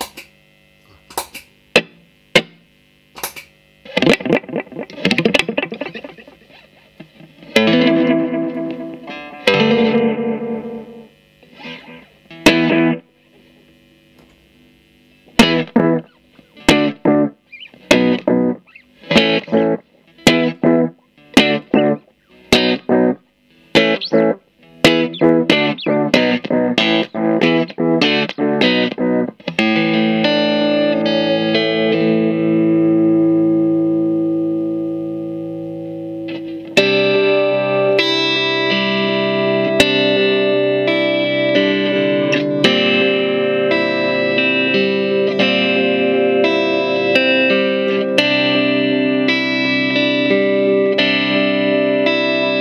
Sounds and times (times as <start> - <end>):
Chorus effect: 0.0 - 52.6
Guitar: 0.0 - 52.6
Inside, small room: 0.0 - 52.6.